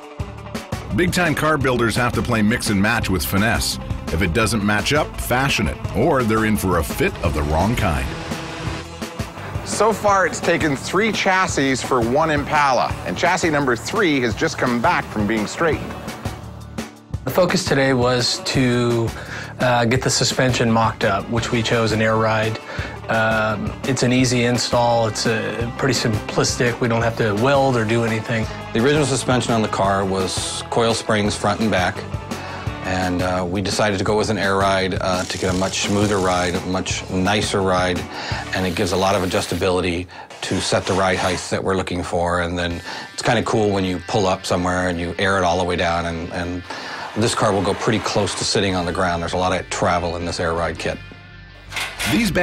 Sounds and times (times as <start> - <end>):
Music: 0.0 - 52.4
Speech: 0.9 - 8.1, 9.6 - 15.8, 17.2 - 32.0, 32.8 - 51.0, 52.0 - 52.4.